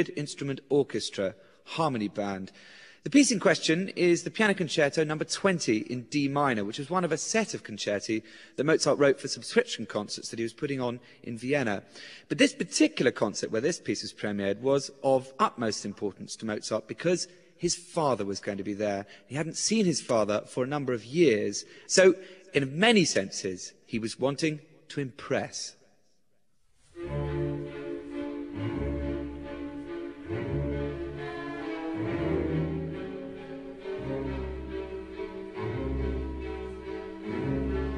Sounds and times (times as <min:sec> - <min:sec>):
Speech: 0:00.0 - 0:25.8.